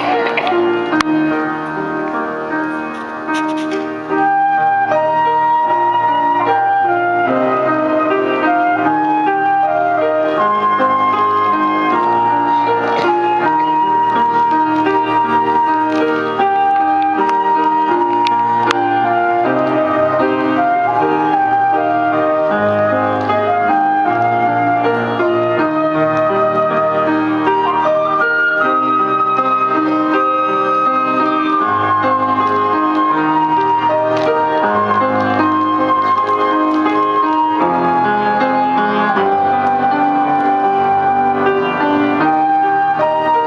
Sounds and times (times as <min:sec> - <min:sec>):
Music: 0:00.0 - 0:43.4.